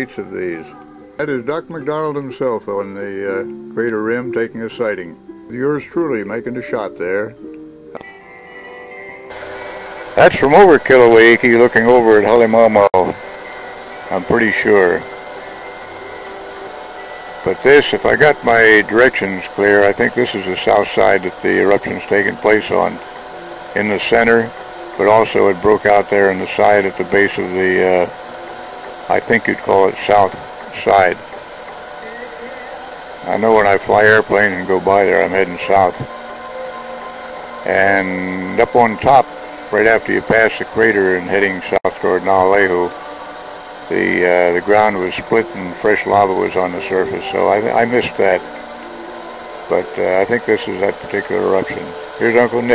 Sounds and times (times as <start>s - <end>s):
Speech: 0.0s - 7.4s, 10.2s - 13.2s, 14.1s - 15.0s, 17.5s - 23.0s, 23.8s - 28.1s, 29.1s - 31.2s, 33.3s - 36.1s, 37.7s - 43.0s, 43.9s - 48.4s, 49.7s - 52.7s.